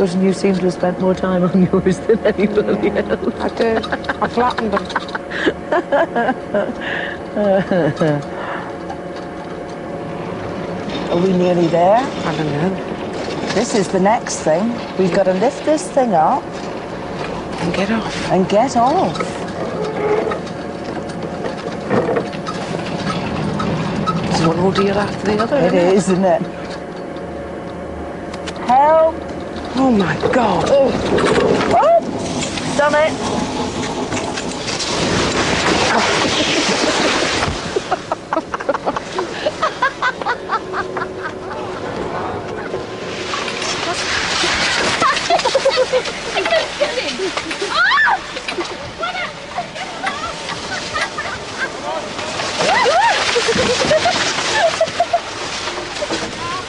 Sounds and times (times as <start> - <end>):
Outside, urban or manmade: 0.0 - 56.6.